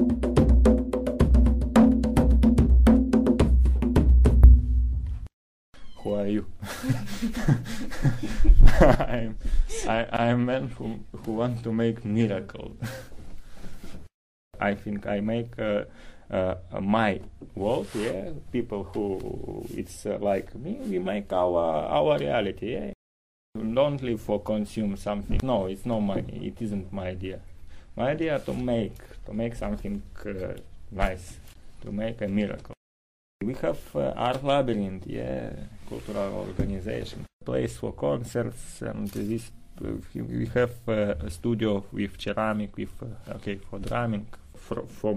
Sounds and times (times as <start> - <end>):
Speech: 6.0 - 6.6, 9.2 - 12.8, 14.6 - 23.0, 23.6 - 27.4, 28.0 - 32.8, 33.4 - 45.1.